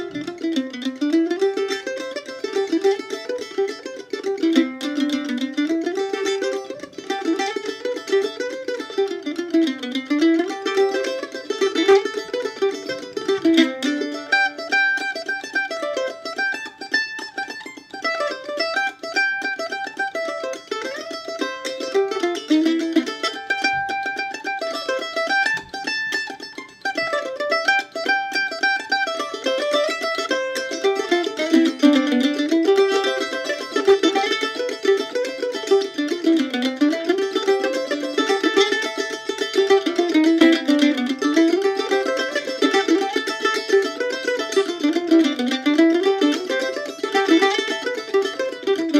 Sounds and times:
Pizzicato: 0.0 - 48.9.

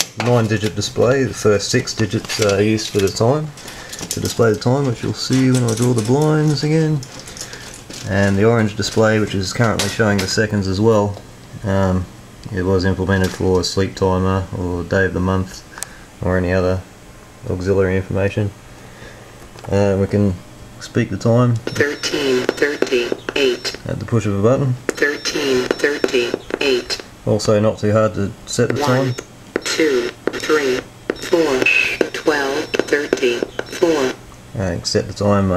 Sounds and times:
Speech: 0.2 - 7.1, 8.0 - 18.6, 19.7 - 35.5
Radio: 0.2 - 10.4, 21.6 - 27.2, 28.5 - 34.2.

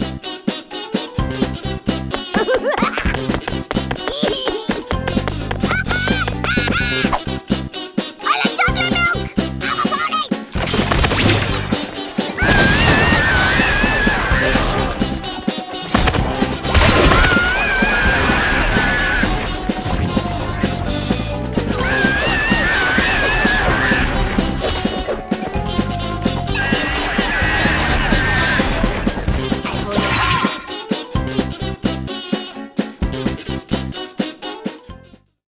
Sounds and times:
Music: 0.0 - 35.4.

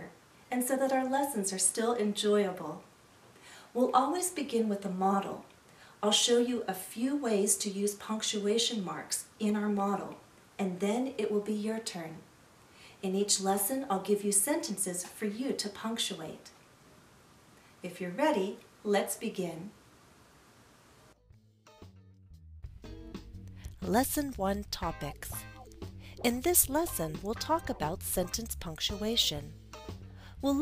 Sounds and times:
Speech: 0.0 - 2.8, 3.8 - 12.2, 13.0 - 16.5, 17.8 - 19.8, 23.8 - 25.4, 26.2 - 29.5, 30.4 - 30.6.

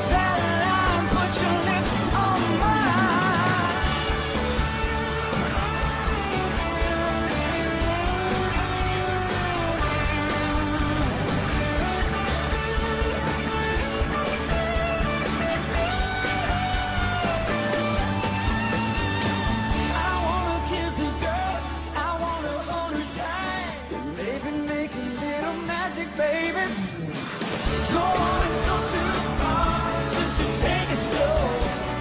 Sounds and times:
Singing: 0.0 - 4.2, 19.9 - 27.1, 27.7 - 32.0.

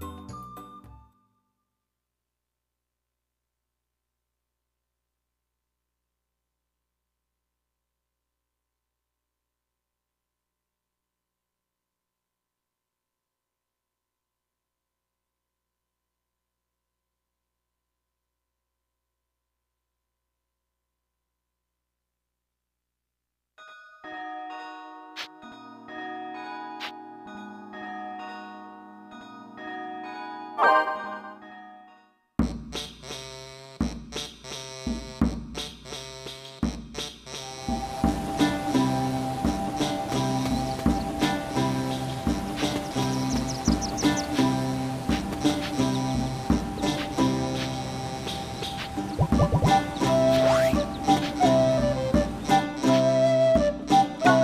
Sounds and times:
Music: 0.0 - 1.7, 23.6 - 54.4.

